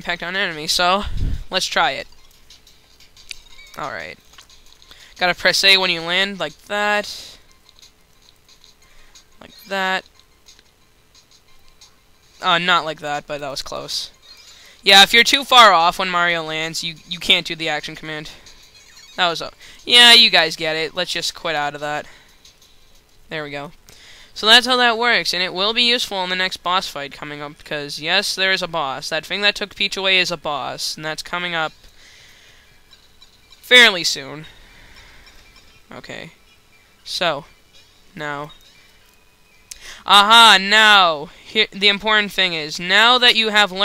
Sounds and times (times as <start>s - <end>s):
Speech: 0.0s - 2.1s, 5.2s - 7.4s, 9.4s - 10.0s, 12.4s - 14.2s, 14.9s - 18.4s, 19.2s - 22.1s, 24.4s - 31.7s, 35.9s - 36.3s, 40.1s - 43.8s
Music: 0.0s - 24.6s, 29.5s - 39.8s.